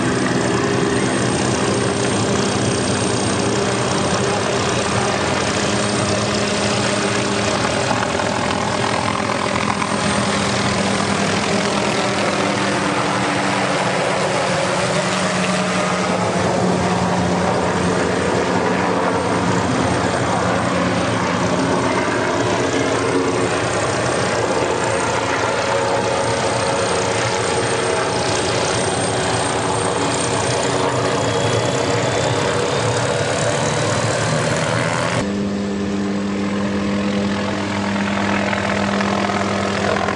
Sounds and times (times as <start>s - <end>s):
Vehicle: 0.0s - 40.1s.